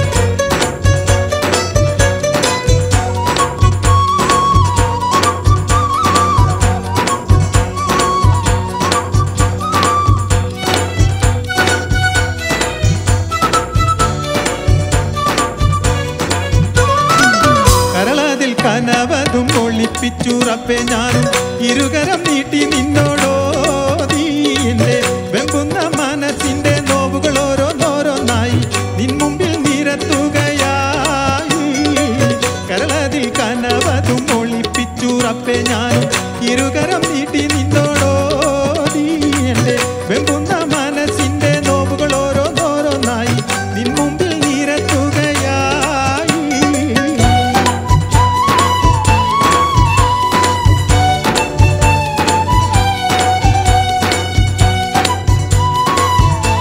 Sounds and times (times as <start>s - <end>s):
Music: 0.0s - 56.6s.